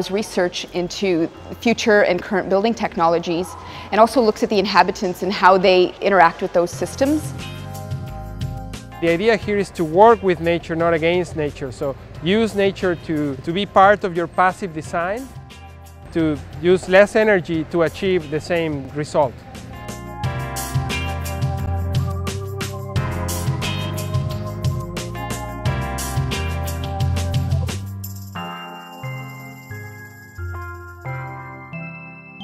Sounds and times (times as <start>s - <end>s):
Music: 3.6s - 32.4s
Speech: 9.0s - 15.3s, 16.1s - 19.3s.